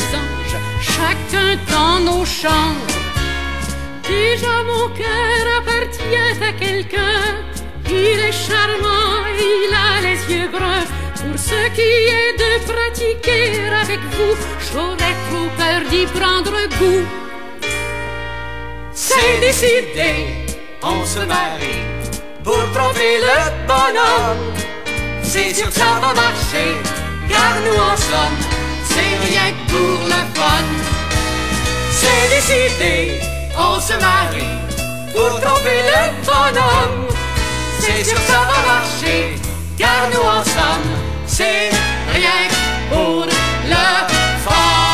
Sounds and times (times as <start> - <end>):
Music: 0.0 - 44.9.